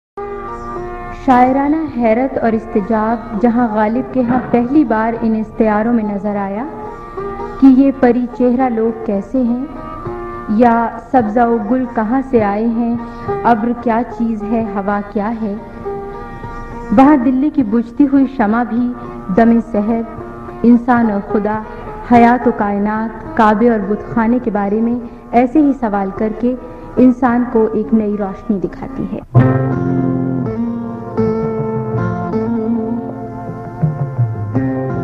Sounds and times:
Music: 0.2s - 35.0s
Speech: 1.2s - 6.7s, 7.6s - 9.7s, 10.5s - 15.6s, 16.9s - 29.3s.

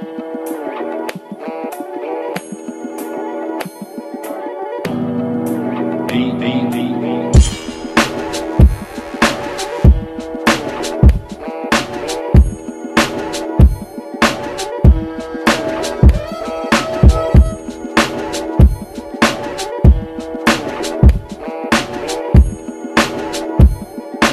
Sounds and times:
Electronica: 13.2s - 20.2s.

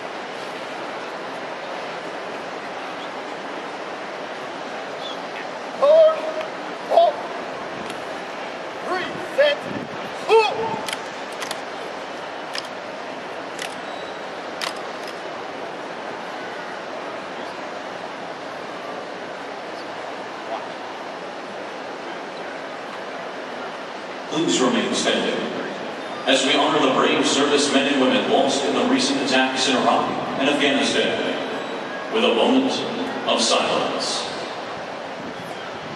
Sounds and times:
Speech: 8.9s - 9.6s, 24.3s - 34.5s.

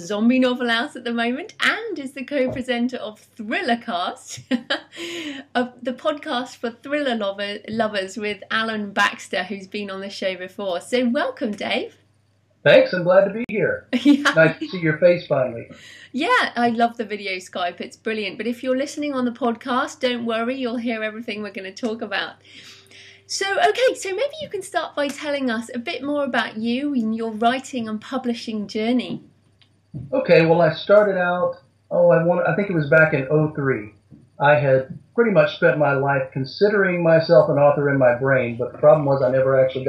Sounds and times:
Speech: 0.0s - 4.8s, 5.4s - 11.9s, 12.7s - 22.4s, 23.3s - 29.2s, 30.0s - 39.8s.

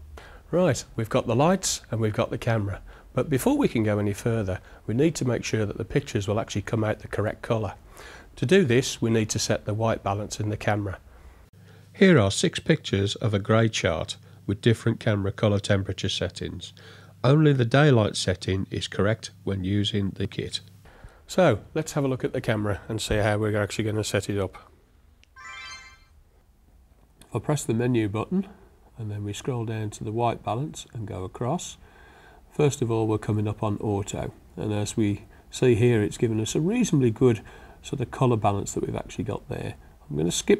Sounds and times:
Speech: 0.5s - 7.8s, 8.4s - 11.0s, 12.0s - 20.7s, 21.3s - 24.7s, 27.2s - 31.8s, 32.5s - 40.5s.

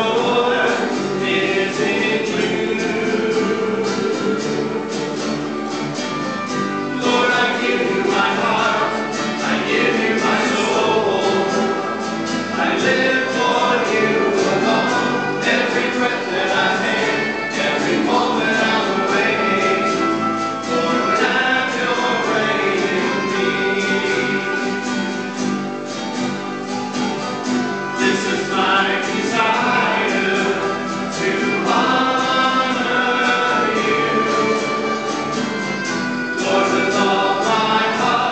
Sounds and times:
Acoustic guitar: 0.0s - 38.3s
Strum: 0.0s - 38.3s.

